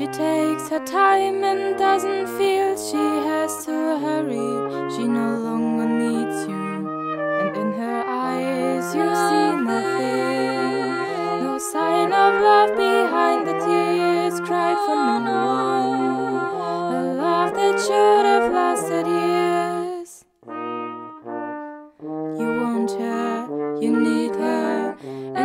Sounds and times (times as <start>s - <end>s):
Trombone: 0.0s - 25.4s.